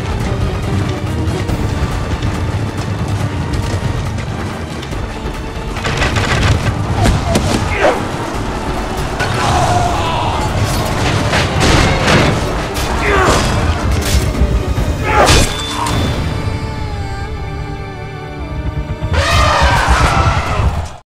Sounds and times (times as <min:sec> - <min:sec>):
Music: 0:00.0 - 0:21.0.